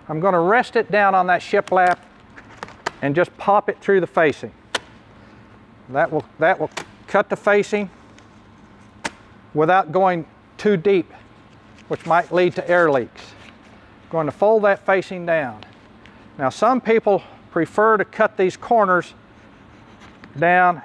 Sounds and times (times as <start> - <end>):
Speech: 0.1 - 2.0, 3.0 - 4.5, 5.9 - 7.9, 9.6 - 11.2, 11.9 - 13.4, 14.1 - 15.7, 16.4 - 19.2, 20.4 - 20.8.